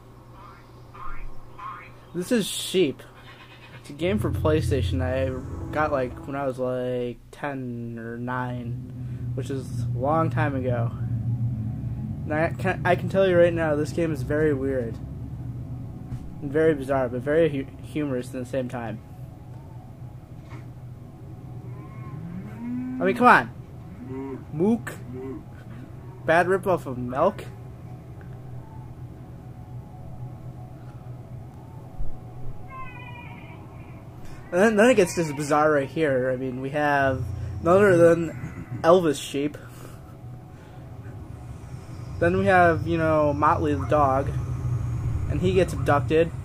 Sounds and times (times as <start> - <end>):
Speech: 1.0 - 3.1, 3.9 - 8.8, 9.4 - 11.0, 12.3 - 15.0, 16.4 - 19.0, 34.5 - 39.6, 42.2 - 44.4, 45.3 - 46.3
Music: 4.1 - 6.6, 15.1 - 34.9.